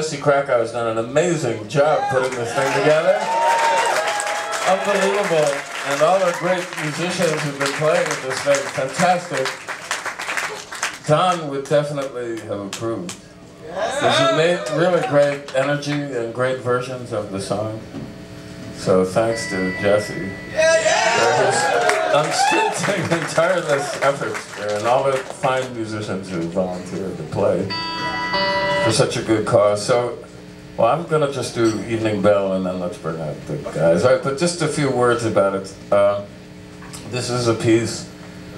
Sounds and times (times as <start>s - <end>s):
Speech: 0.0s - 3.3s, 4.7s - 9.6s, 11.0s - 13.2s, 13.8s - 17.9s, 18.8s - 20.4s, 21.1s - 27.7s, 28.9s - 36.3s, 37.0s - 38.1s.